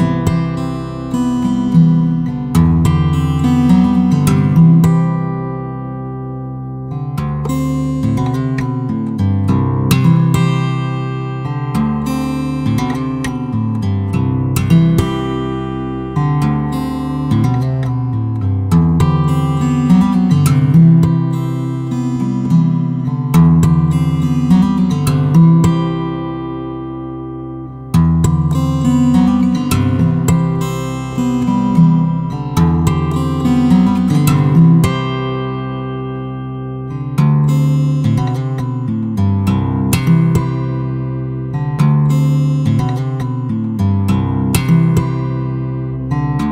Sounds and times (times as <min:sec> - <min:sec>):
Acoustic guitar: 0:00.0 - 0:46.5
Strum: 0:00.0 - 0:46.5.